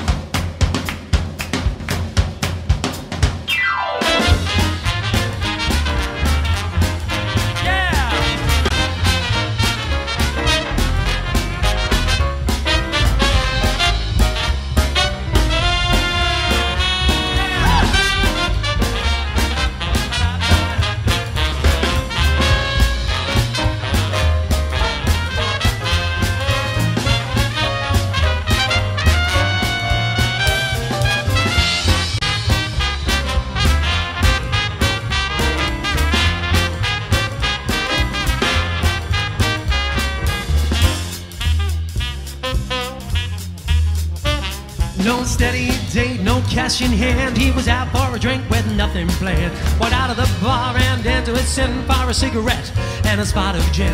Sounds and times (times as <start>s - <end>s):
Swing music: 0.0s - 53.9s.